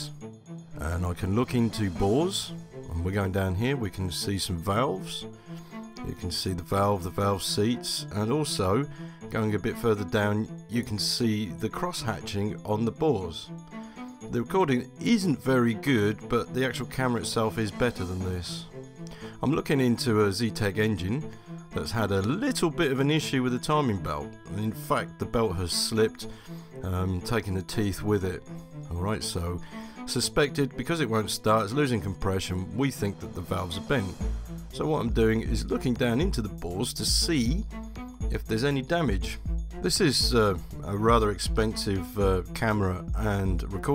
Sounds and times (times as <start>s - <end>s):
Music: 0.0s - 43.9s
Speech: 0.8s - 5.3s, 6.0s - 13.5s, 14.3s - 18.7s, 19.4s - 34.2s, 34.8s - 37.7s, 38.3s - 43.9s.